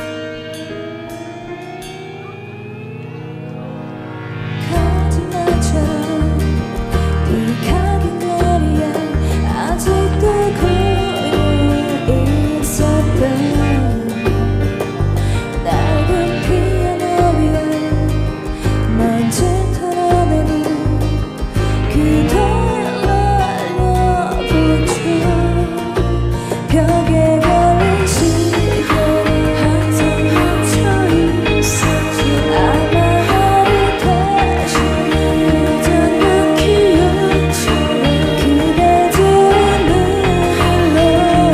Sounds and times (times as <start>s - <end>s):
Music: 0.0s - 41.5s.